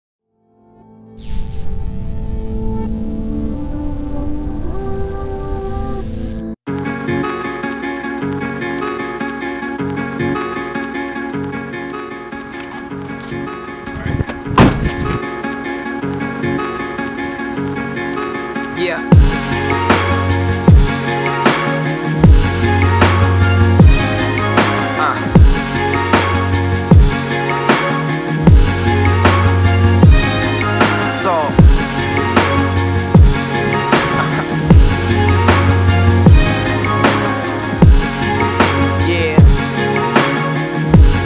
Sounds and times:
Ambient music: 0:00.4 - 0:41.2.

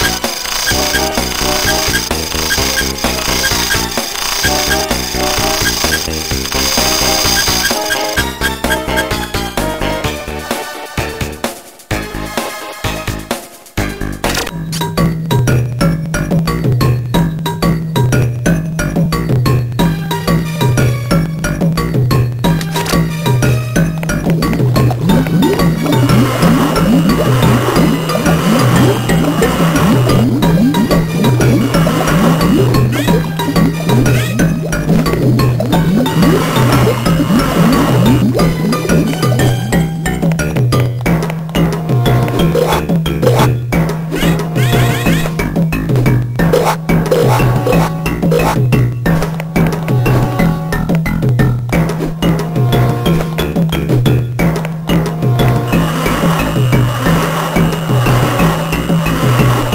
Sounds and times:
Music: 0:00.0 - 0:59.7.

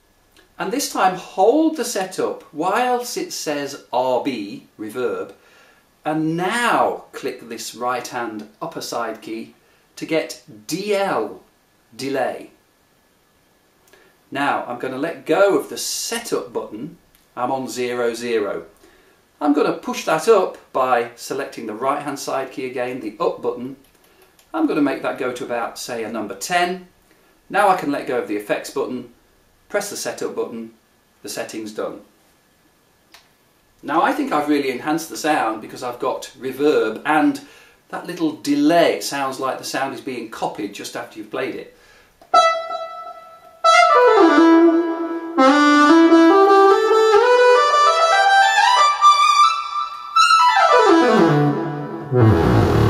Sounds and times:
Inside, small room: 0:00.0 - 0:52.8
Speech: 0:00.6 - 0:05.4, 0:06.0 - 0:12.6, 0:14.3 - 0:18.7, 0:19.4 - 0:23.8, 0:24.5 - 0:26.9, 0:27.5 - 0:32.1, 0:33.8 - 0:41.8
Wind instrument, woodwind instrument: 0:42.3 - 0:52.8.

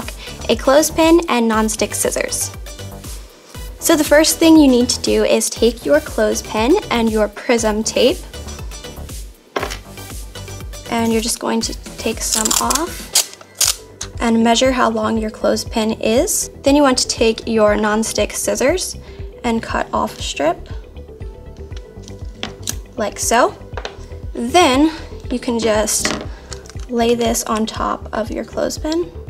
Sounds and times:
Music: 0:00.0 - 0:29.2
Speech: 0:00.4 - 0:02.5, 0:03.8 - 0:08.2, 0:10.9 - 0:13.0, 0:14.2 - 0:20.6, 0:23.0 - 0:23.6, 0:24.4 - 0:26.1, 0:26.9 - 0:29.1.

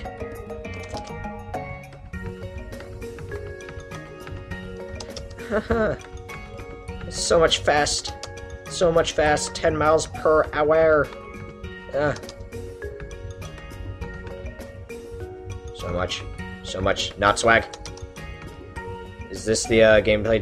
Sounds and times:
Music: 0:00.0 - 0:20.4
Speech: 0:07.1 - 0:08.1, 0:08.7 - 0:11.1, 0:12.0 - 0:12.2, 0:15.8 - 0:17.7, 0:19.4 - 0:20.4.

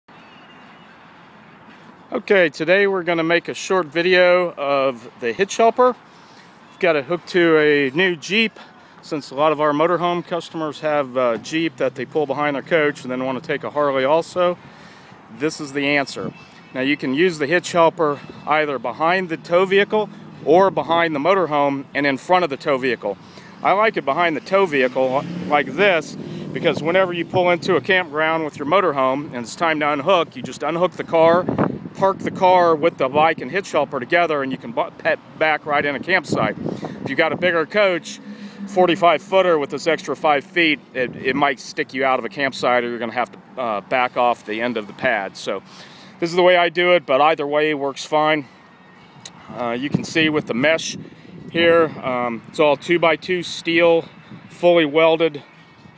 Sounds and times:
Vehicle: 0:00.1 - 0:55.9.

